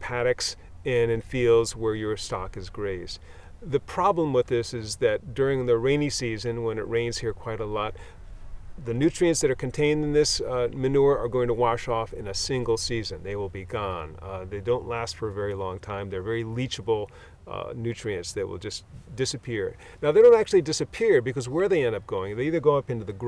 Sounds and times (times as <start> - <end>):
Speech: 0.0 - 8.0, 8.8 - 23.2.